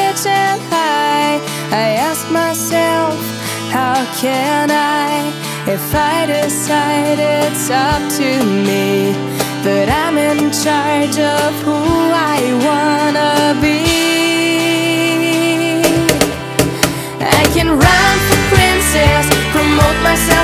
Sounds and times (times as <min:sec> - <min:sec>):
Music: 0:00.0 - 0:20.4.